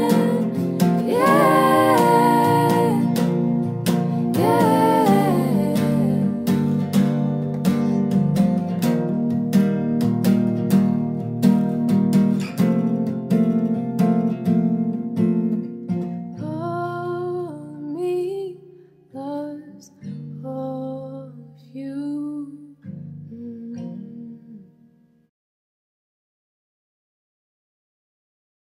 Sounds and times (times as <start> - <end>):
Acoustic guitar: 0.0 - 25.3.